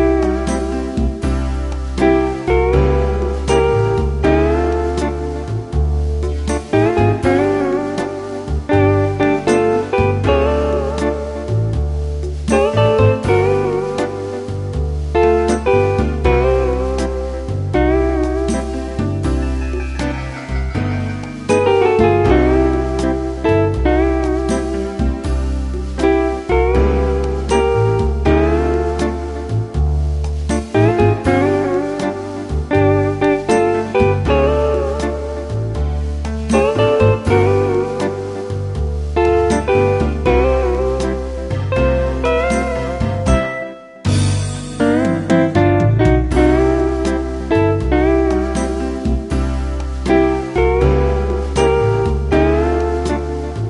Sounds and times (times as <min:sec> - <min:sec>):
Music: 0:00.0 - 0:53.7.